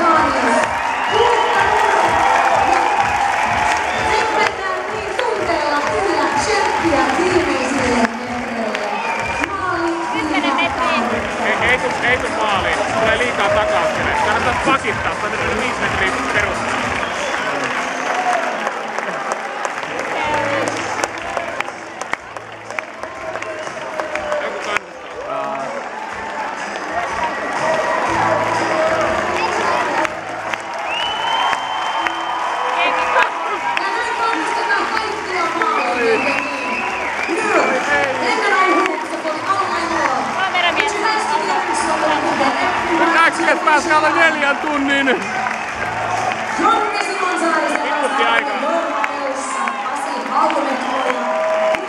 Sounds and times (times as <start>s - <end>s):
Music: 0.0s - 51.8s.